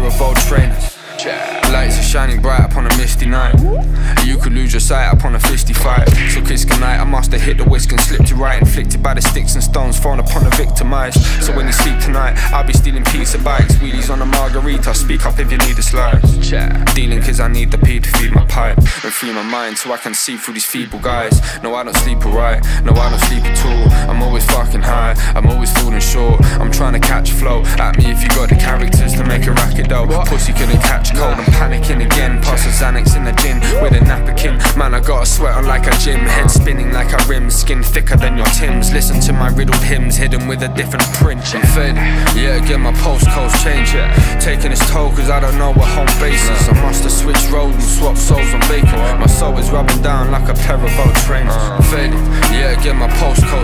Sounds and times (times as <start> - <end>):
Independent music: 0.0 - 53.6.